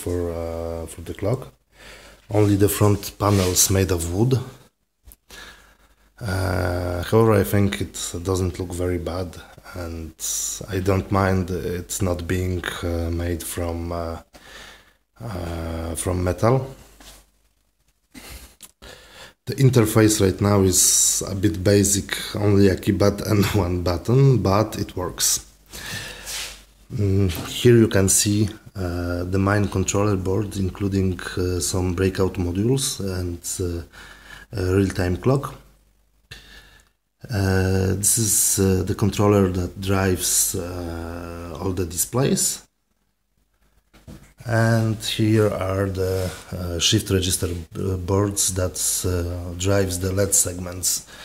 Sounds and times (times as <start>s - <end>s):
Speech: 0.0s - 1.6s, 2.3s - 4.7s, 6.2s - 14.4s, 15.2s - 16.9s, 19.4s - 25.5s, 26.9s - 33.9s, 34.5s - 35.7s, 37.2s - 42.7s, 44.3s - 51.1s.